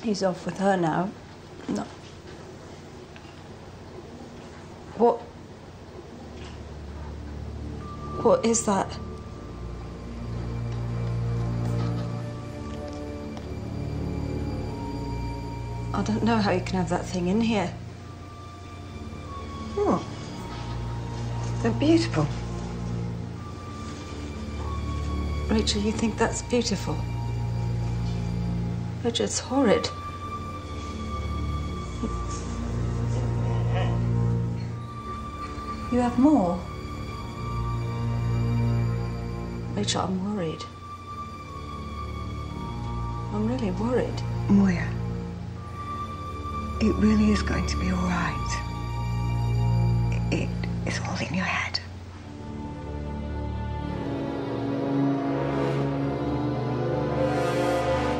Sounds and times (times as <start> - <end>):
Music: 0.0 - 58.1.